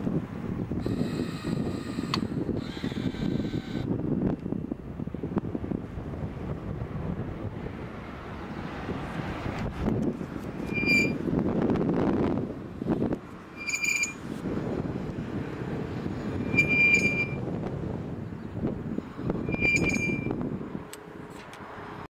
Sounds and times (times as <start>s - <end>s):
Wind noise (microphone): 0.0s - 22.0s.